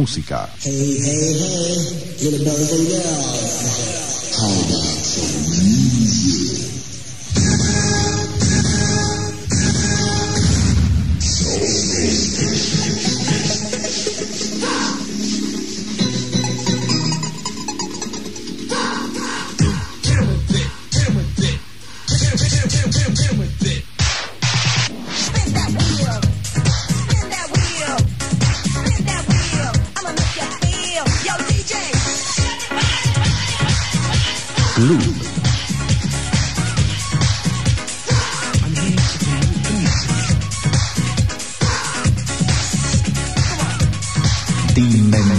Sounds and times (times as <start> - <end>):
Music: 0.7 - 45.3.